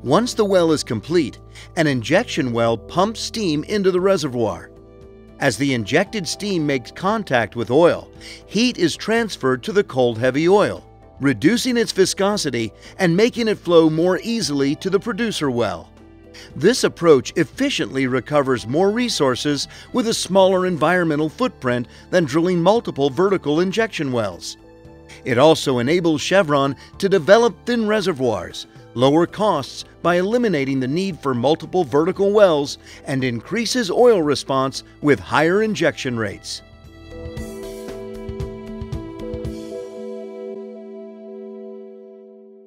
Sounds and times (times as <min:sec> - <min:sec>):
Speech: 0:00.0 - 0:04.7, 0:05.4 - 0:15.9, 0:16.6 - 0:36.6
Music: 0:00.0 - 0:42.6.